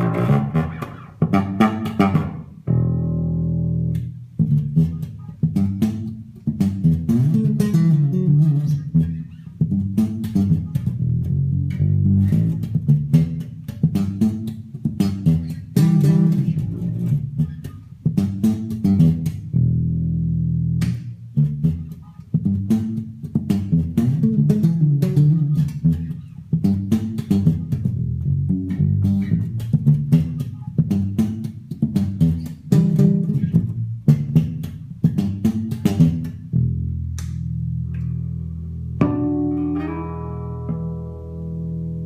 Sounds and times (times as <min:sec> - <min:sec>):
Bass guitar: 0:00.0 - 0:42.0.